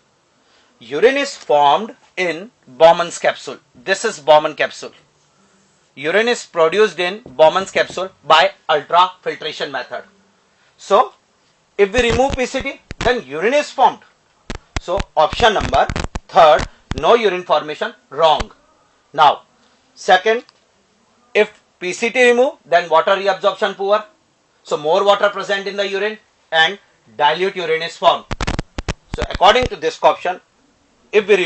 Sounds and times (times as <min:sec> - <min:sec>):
Speech: 0:00.8 - 0:05.0, 0:06.0 - 0:10.1, 0:10.8 - 0:11.2, 0:11.8 - 0:14.1, 0:14.8 - 0:18.6, 0:19.2 - 0:20.5, 0:21.3 - 0:28.3, 0:29.1 - 0:30.5, 0:31.2 - 0:31.4.